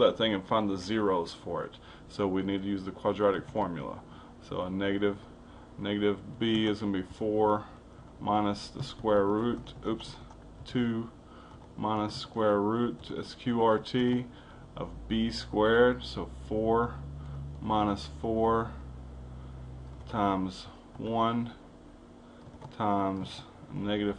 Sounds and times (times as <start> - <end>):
Speech: 0.0 - 11.2, 11.8 - 17.0, 17.6 - 18.8, 20.1 - 21.6, 22.7 - 24.1.